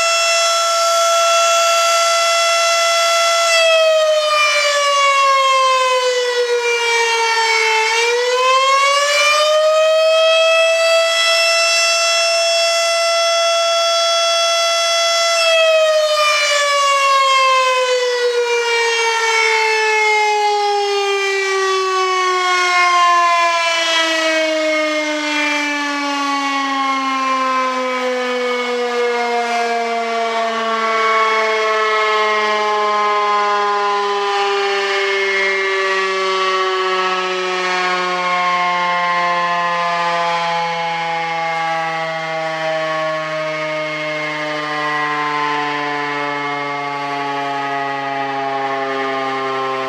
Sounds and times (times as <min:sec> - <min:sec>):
Civil defense siren: 0:00.0 - 0:49.8.